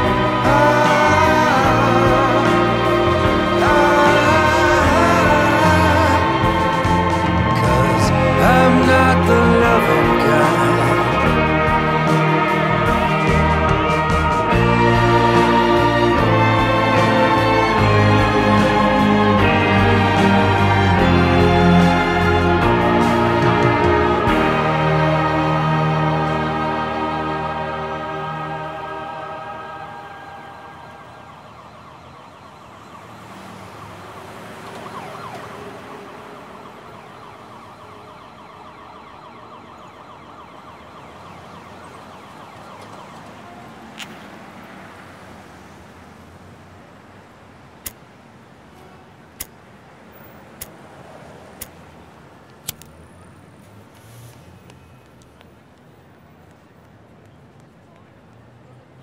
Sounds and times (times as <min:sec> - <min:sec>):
Ambulance (siren): 0:00.0 - 0:45.8.